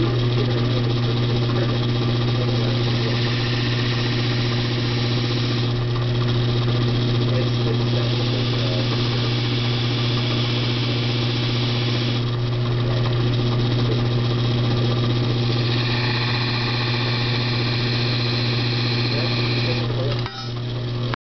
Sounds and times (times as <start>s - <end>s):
Speech: 0.0s - 3.5s, 7.2s - 9.2s, 12.8s - 15.0s, 19.1s - 20.9s.